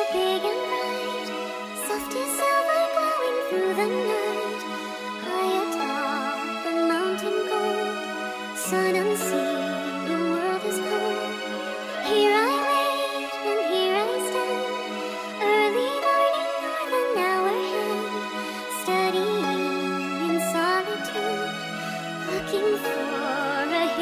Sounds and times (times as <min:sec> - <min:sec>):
Lullaby: 0:00.0 - 0:24.0.